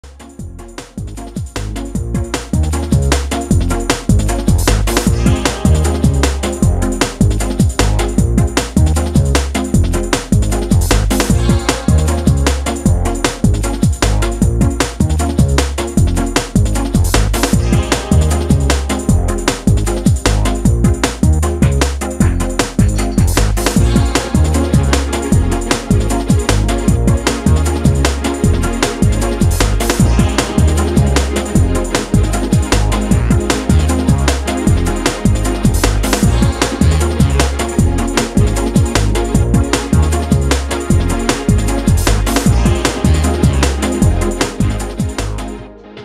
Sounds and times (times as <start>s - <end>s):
Drum and bass: 0.0s - 46.0s.